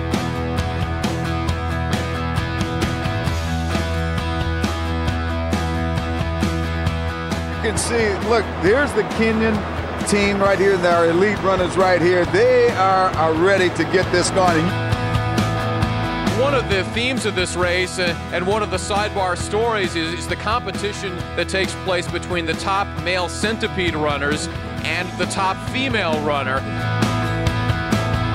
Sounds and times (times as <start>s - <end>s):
Music: 0.0s - 28.3s
Outside, urban or manmade: 0.0s - 28.3s
Speech: 7.6s - 14.8s, 16.3s - 26.6s.